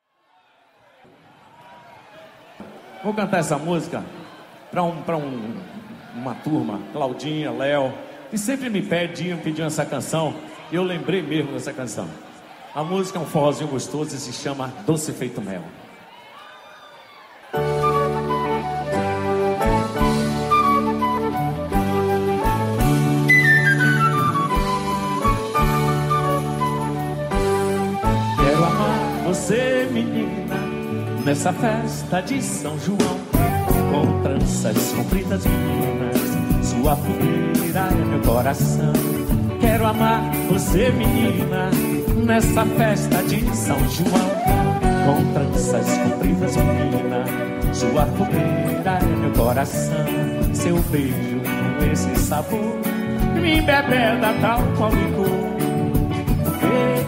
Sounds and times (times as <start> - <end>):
Music: 17.5 - 57.0.